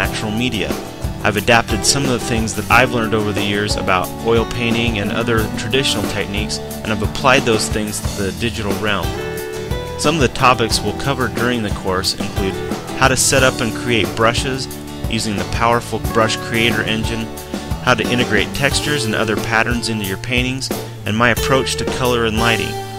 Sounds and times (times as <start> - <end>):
Speech: 0.0 - 9.2, 10.0 - 22.8
Music: 0.0 - 22.9.